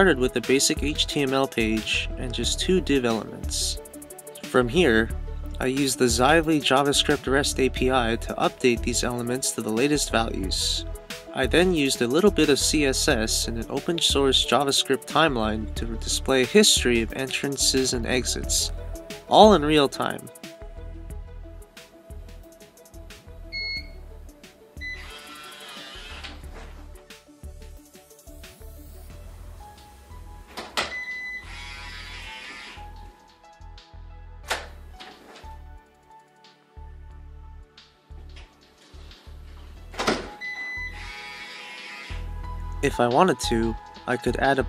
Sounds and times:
Music: 0:00.0 - 0:44.6
Door: 0:30.5 - 0:31.1, 0:34.5 - 0:35.5, 0:40.0 - 0:40.7.

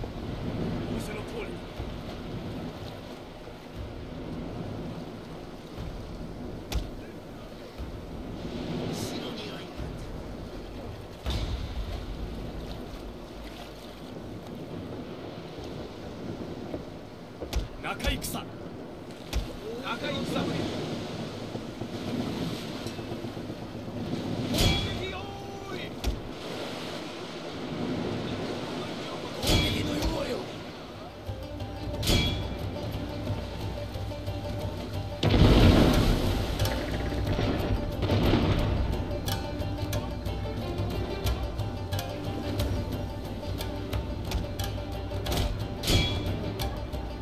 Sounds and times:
Speech: 0:00.9 - 0:01.7, 0:08.9 - 0:10.0, 0:17.8 - 0:18.6, 0:19.6 - 0:20.8, 0:24.7 - 0:26.0, 0:28.3 - 0:31.2
Music: 0:31.1 - 0:47.2.

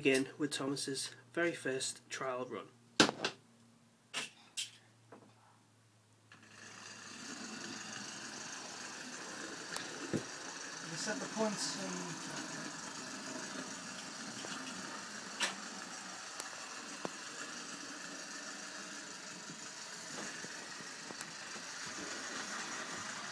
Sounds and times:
Speech: 0:00.0 - 0:02.7, 0:10.8 - 0:12.4.

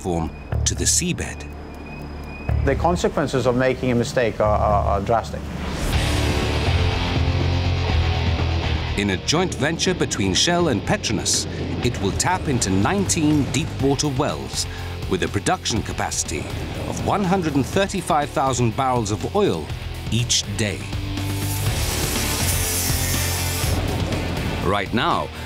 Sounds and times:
Speech: 0:00.0 - 0:01.5, 0:02.6 - 0:05.4, 0:09.0 - 0:20.9, 0:24.6 - 0:25.3
Music: 0:00.0 - 0:03.8, 0:04.4 - 0:25.4.

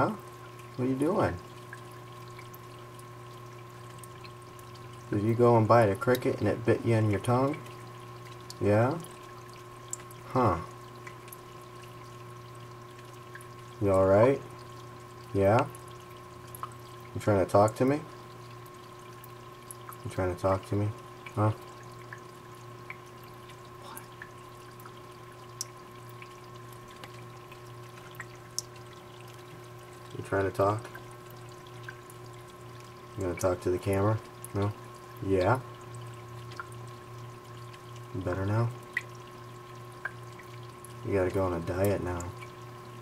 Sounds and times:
Speech: 0:00.0 - 0:00.2, 0:00.8 - 0:01.4, 0:05.1 - 0:07.6, 0:08.6 - 0:09.1, 0:10.3 - 0:10.7, 0:13.8 - 0:14.5, 0:15.3 - 0:15.7, 0:17.2 - 0:18.1, 0:20.1 - 0:21.6, 0:30.2 - 0:30.9, 0:33.2 - 0:35.7, 0:38.2 - 0:38.8, 0:41.0 - 0:42.4.

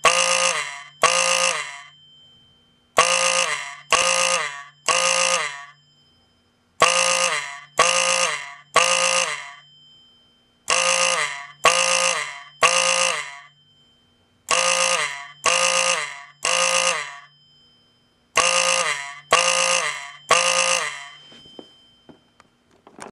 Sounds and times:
Fire alarm: 0:00.0 - 0:22.6.

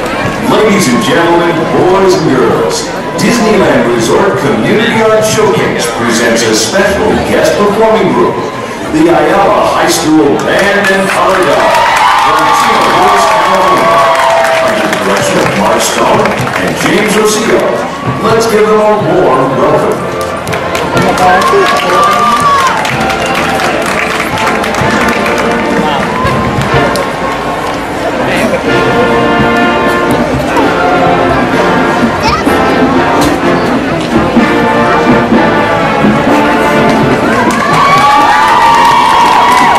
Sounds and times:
Music: 0:11.1 - 0:39.7.

